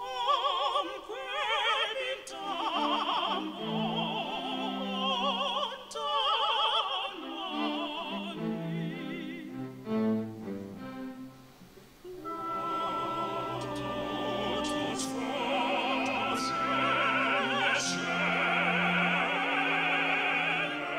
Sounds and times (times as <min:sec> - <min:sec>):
Choir: 0:00.0 - 0:10.9, 0:12.1 - 0:20.9.